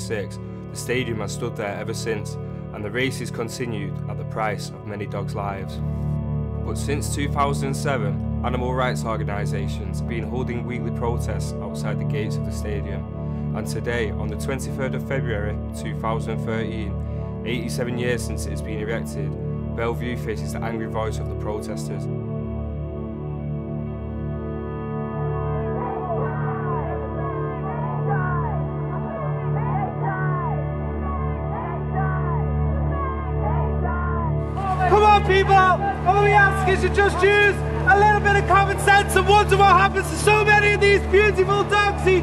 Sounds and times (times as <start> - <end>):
Speech: 0.0 - 5.8, 6.7 - 13.0, 13.6 - 22.1, 34.6 - 42.2
Music: 0.0 - 42.2.